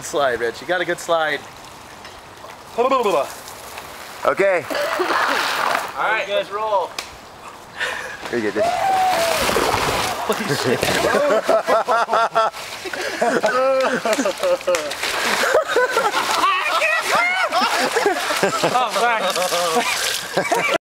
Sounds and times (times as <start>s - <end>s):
Gurgling: 8.6s - 11.4s, 13.4s - 20.8s.